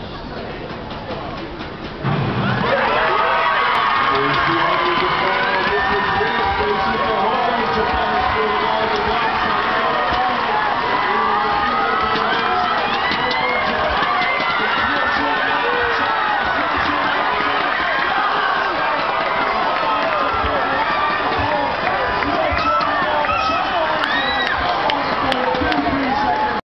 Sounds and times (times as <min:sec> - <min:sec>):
Outside, urban or manmade: 0:00.0 - 0:26.6
Run: 0:00.0 - 0:26.6
Male speech, man speaking: 0:02.7 - 0:26.6.